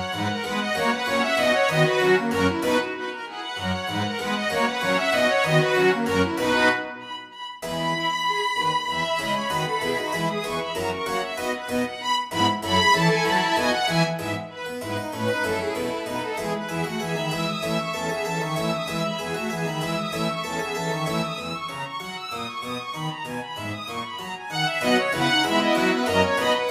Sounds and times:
Violin, fiddle: 0.0s - 26.7s.

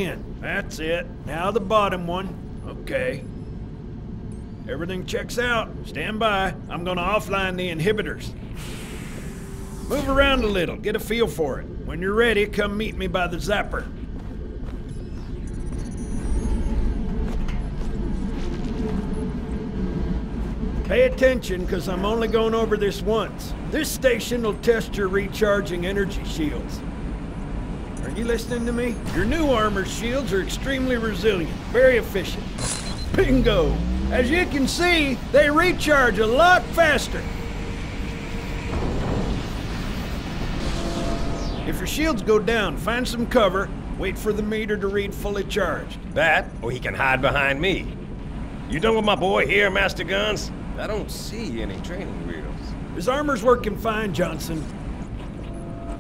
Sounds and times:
Speech: 0.0s - 3.2s, 4.7s - 8.3s, 9.9s - 13.9s, 20.9s - 26.8s, 28.0s - 32.5s, 33.1s - 37.3s, 41.7s - 47.9s, 48.7s - 54.7s.

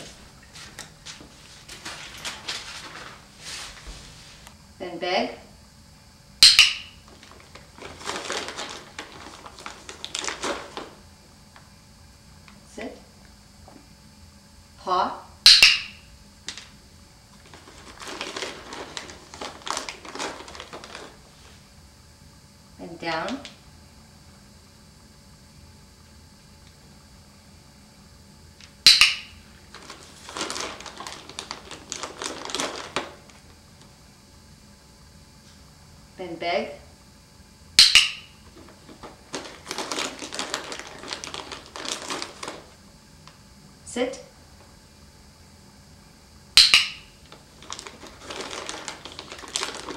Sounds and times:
Speech: 4.8s - 5.5s, 12.7s - 13.0s, 14.8s - 15.3s, 22.8s - 23.5s, 36.2s - 36.9s, 43.9s - 44.3s.

